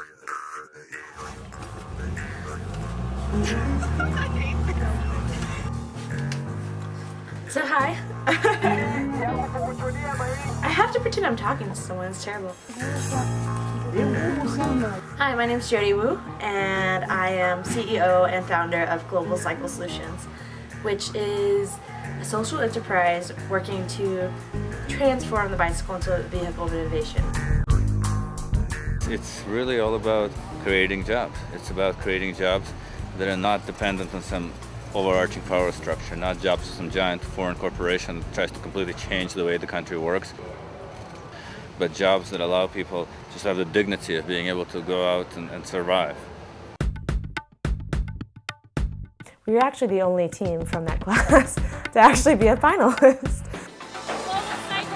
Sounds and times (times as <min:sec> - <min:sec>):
Music: 0:00.0 - 0:39.9, 0:46.8 - 0:54.9.